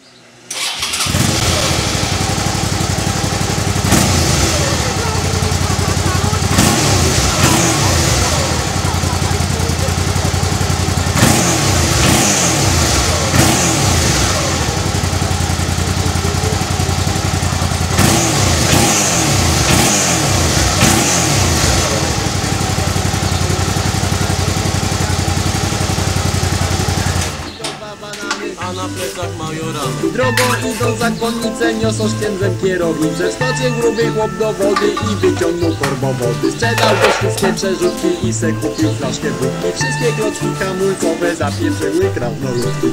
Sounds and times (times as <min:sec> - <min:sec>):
Music: 0:27.6 - 0:42.9.